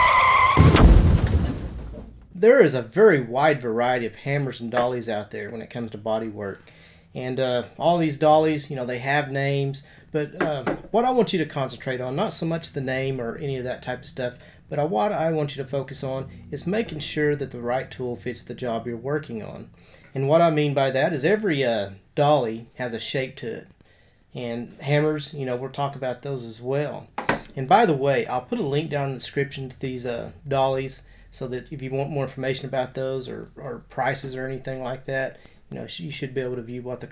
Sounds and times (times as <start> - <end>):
Speech: 2.4 - 6.6, 7.2 - 23.7, 24.4 - 37.1.